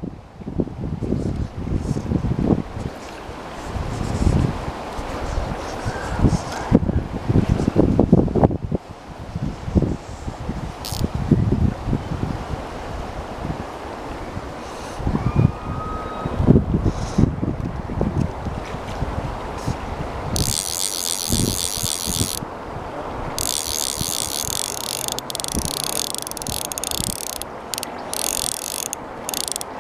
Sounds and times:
Stream: 0:00.0 - 0:29.8
Wind: 0:00.0 - 0:29.8.

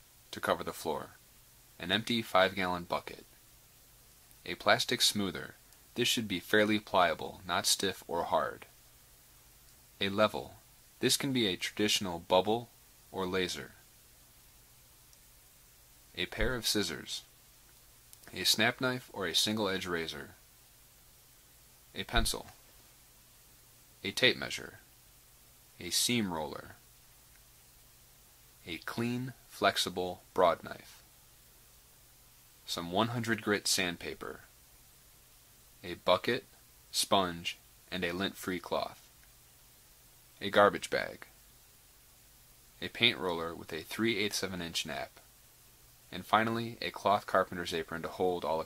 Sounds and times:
Speech: 0:00.3 - 0:01.2, 0:01.8 - 0:03.4, 0:04.4 - 0:08.7, 0:10.0 - 0:13.8, 0:16.1 - 0:17.3, 0:18.3 - 0:20.4, 0:22.0 - 0:22.6, 0:24.0 - 0:24.9, 0:25.8 - 0:26.8, 0:28.6 - 0:31.0, 0:32.7 - 0:34.5, 0:35.8 - 0:39.1, 0:40.4 - 0:41.4, 0:42.8 - 0:45.3, 0:46.1 - 0:48.6.

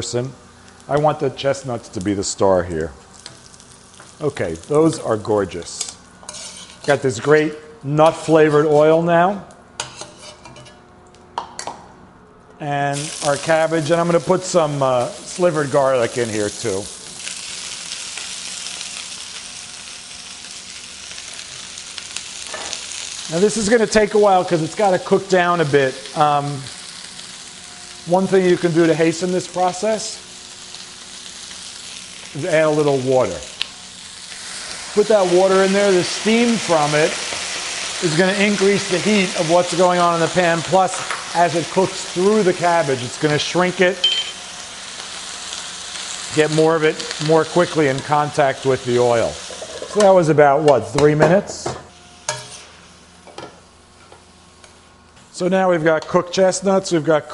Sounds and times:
Speech: 0:00.0 - 0:03.0, 0:04.2 - 0:06.0, 0:06.9 - 0:09.5, 0:12.6 - 0:16.9, 0:23.3 - 0:26.7, 0:28.1 - 0:30.2, 0:32.4 - 0:33.5, 0:35.0 - 0:37.2, 0:38.0 - 0:44.0, 0:46.3 - 0:51.8, 0:55.3 - 0:57.3
Frying (food): 0:00.0 - 0:09.0, 0:12.8 - 0:57.3.

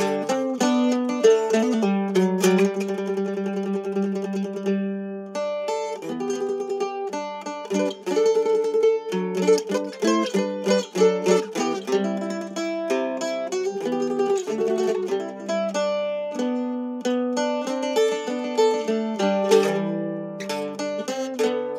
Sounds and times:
Mandolin: 0:00.0 - 0:21.7.

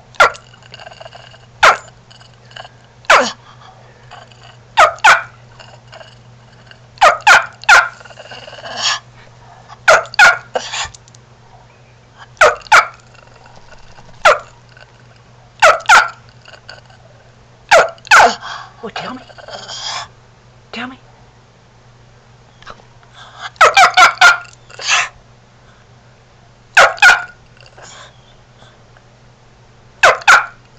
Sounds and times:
Bark: 0:00.2 - 0:00.4, 0:01.6 - 0:01.9, 0:03.1 - 0:03.4, 0:04.8 - 0:05.4, 0:07.0 - 0:08.0, 0:09.5 - 0:10.6, 0:12.4 - 0:13.0, 0:14.2 - 0:14.5, 0:15.6 - 0:16.2, 0:17.7 - 0:18.4, 0:23.6 - 0:25.1, 0:26.8 - 0:27.4, 0:30.0 - 0:30.6
Speech: 0:18.8 - 0:19.3, 0:20.7 - 0:21.0.

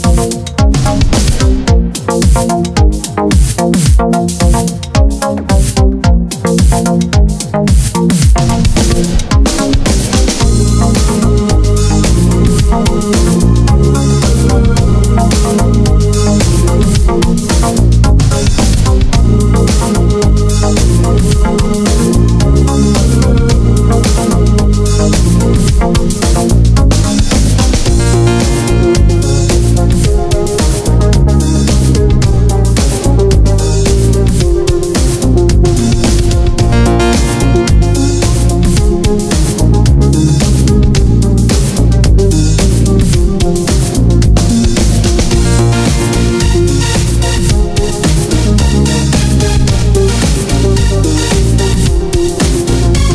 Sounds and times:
Music: 0:00.0 - 0:53.1.

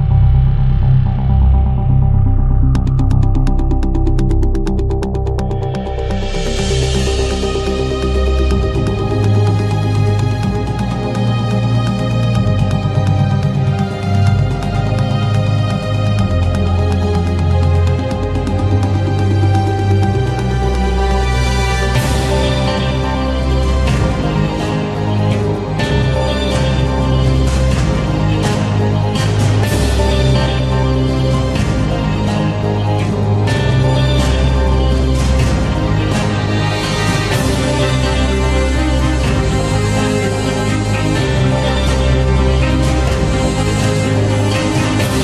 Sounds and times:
Music: 0:00.0 - 0:45.2.

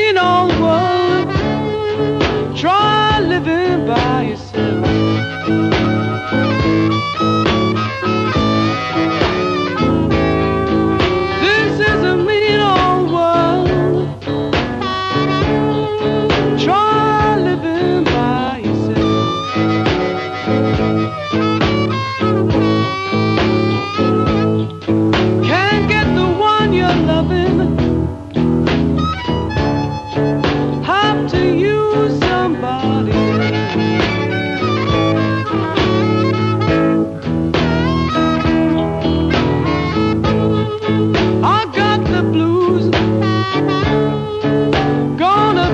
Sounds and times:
Music: 0:00.0 - 0:45.7.

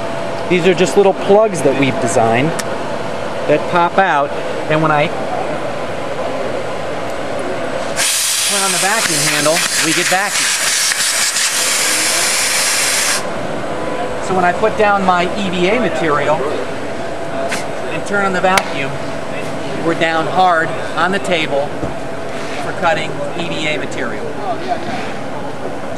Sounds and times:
Hiss: 0:08.0 - 0:13.2.

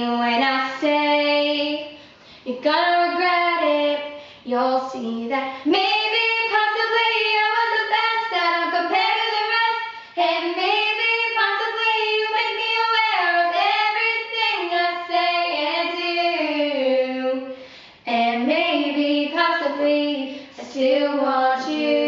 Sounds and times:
Female singing: 0:00.0 - 0:22.0.

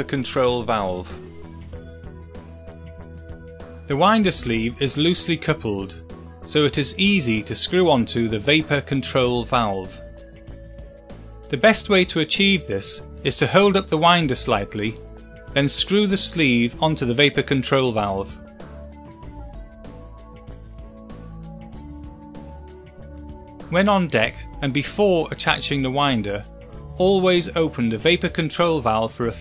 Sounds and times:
Speech: 0:00.0 - 0:01.2, 0:03.9 - 0:10.0, 0:11.5 - 0:15.0, 0:15.6 - 0:18.4, 0:23.7 - 0:29.4.

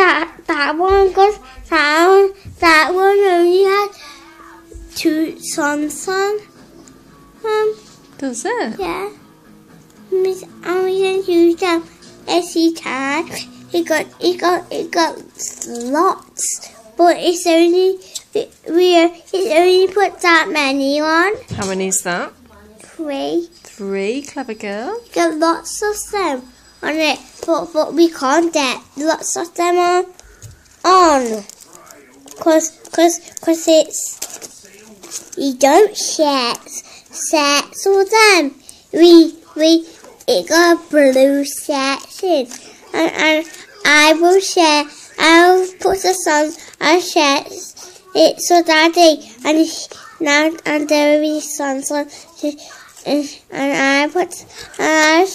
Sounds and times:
Child speech, kid speaking: 0:00.0 - 0:06.5, 0:07.4 - 0:09.2, 0:10.1 - 0:21.8, 0:22.4 - 0:23.8, 0:24.9 - 0:30.2, 0:30.8 - 0:31.6, 0:32.3 - 0:34.3, 0:35.2 - 0:55.3
Conversation: 0:00.0 - 0:55.3
Female speech, woman speaking: 0:08.2 - 0:08.8, 0:21.5 - 0:23.0, 0:23.7 - 0:25.1.

